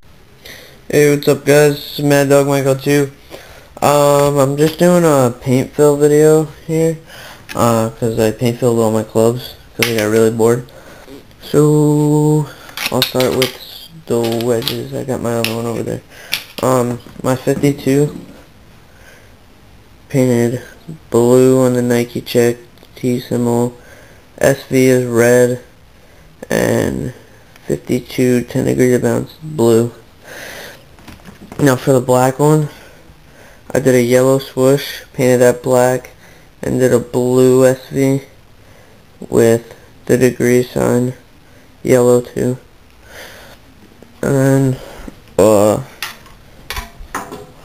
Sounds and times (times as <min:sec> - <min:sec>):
Speech: 0:00.9 - 0:03.2, 0:03.8 - 0:10.7, 0:11.4 - 0:16.0, 0:16.6 - 0:18.4, 0:20.1 - 0:23.8, 0:24.4 - 0:25.7, 0:26.4 - 0:30.0, 0:31.6 - 0:32.8, 0:33.7 - 0:38.4, 0:39.2 - 0:41.2, 0:41.8 - 0:42.7, 0:44.2 - 0:45.9.